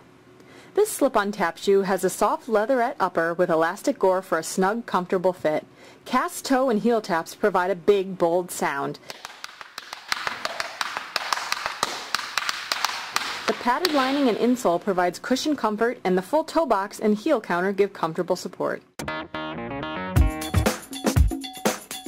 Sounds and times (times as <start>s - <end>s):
Speech: 0.8s - 9.0s, 13.5s - 18.9s
Music: 19.0s - 22.0s.